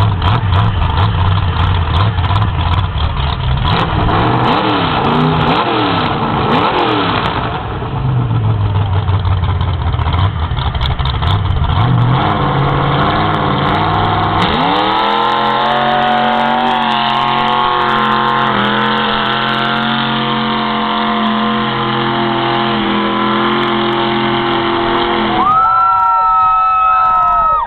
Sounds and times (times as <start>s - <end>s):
Truck: 0.0s - 27.6s.